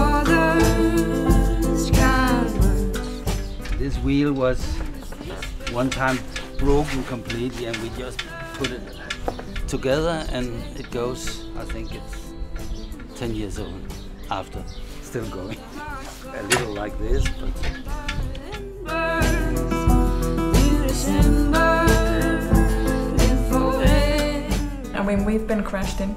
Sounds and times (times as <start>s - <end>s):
Music: 0.0s - 26.1s
Speech: 5.7s - 8.9s, 13.2s - 15.7s, 16.3s - 17.6s.